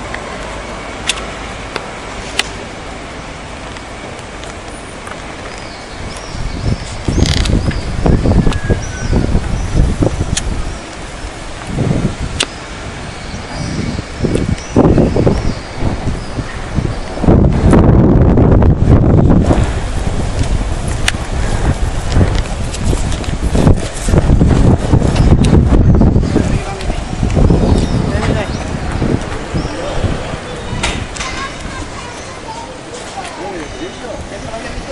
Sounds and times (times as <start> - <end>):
Outside, urban or manmade: 0.0 - 34.9.